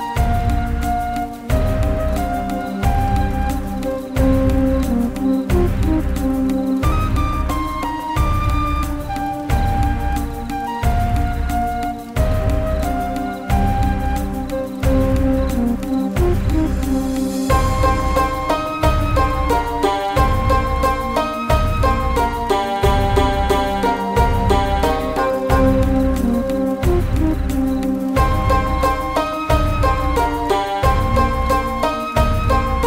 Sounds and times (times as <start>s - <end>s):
Soundtrack music: 0.0s - 32.8s.